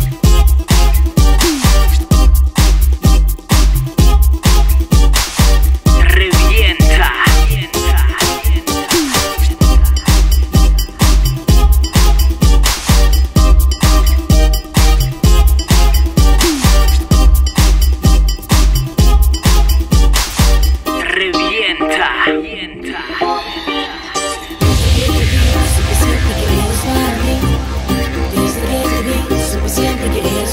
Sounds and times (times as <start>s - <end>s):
Disco: 0.0s - 30.5s.